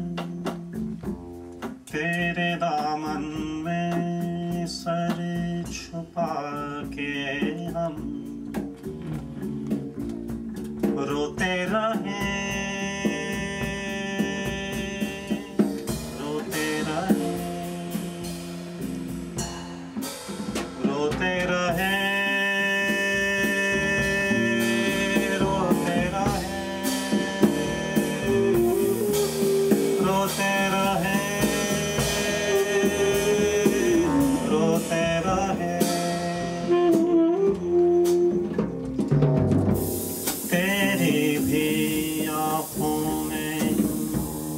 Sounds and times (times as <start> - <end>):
Saxophone: 0.0 - 1.4, 7.2 - 20.1, 20.7 - 39.2, 40.2 - 44.5
Brass instrument: 7.0 - 44.5.